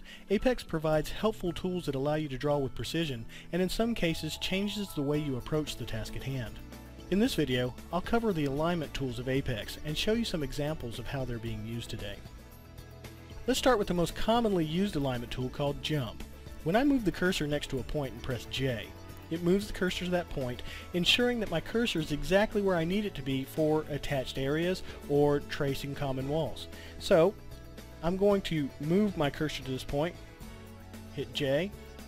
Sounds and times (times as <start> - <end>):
Music: 0.0 - 32.0
Speech: 0.3 - 12.3, 13.5 - 27.4, 28.0 - 30.2, 31.2 - 31.7.